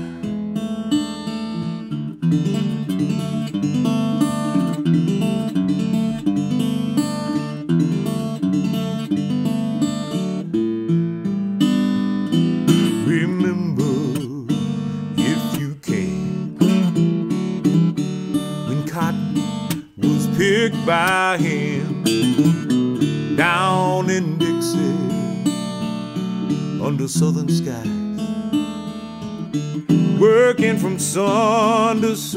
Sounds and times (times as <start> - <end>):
Acoustic guitar: 0.0 - 32.3
Strum: 0.0 - 32.3.